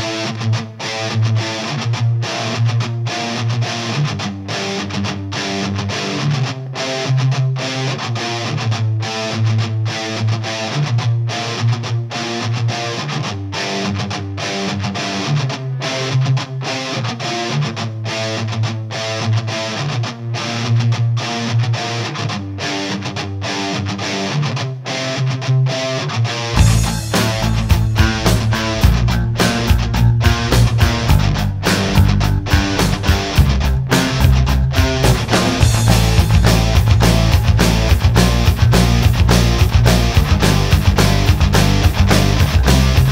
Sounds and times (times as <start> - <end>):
Music: 0.0 - 43.1.